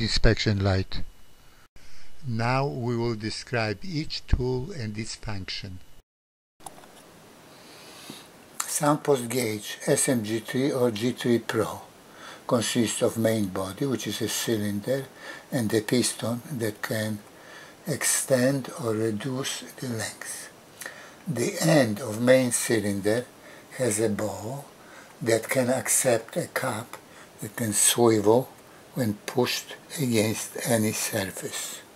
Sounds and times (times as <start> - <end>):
Speech: 0.0 - 1.1, 2.2 - 5.8, 8.6 - 11.9, 12.5 - 20.5, 21.3 - 31.9.